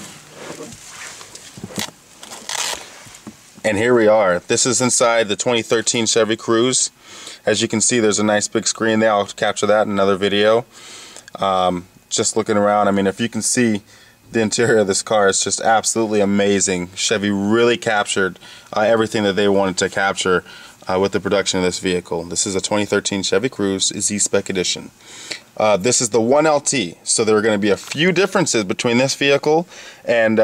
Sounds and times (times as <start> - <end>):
Speech: 3.6 - 10.7, 11.3 - 25.0, 25.6 - 30.4.